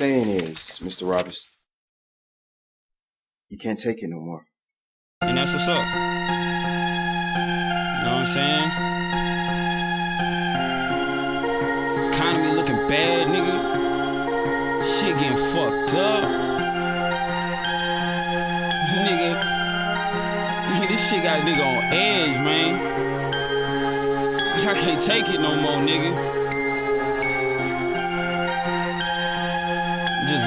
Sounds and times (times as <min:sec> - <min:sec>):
Speech: 0:00.0 - 0:01.5, 0:03.5 - 0:04.5, 0:05.3 - 0:05.8, 0:14.9 - 0:16.2, 0:18.8 - 0:19.4, 0:20.7 - 0:22.8, 0:24.6 - 0:26.2, 0:30.2 - 0:30.4
Music: 0:05.2 - 0:30.4.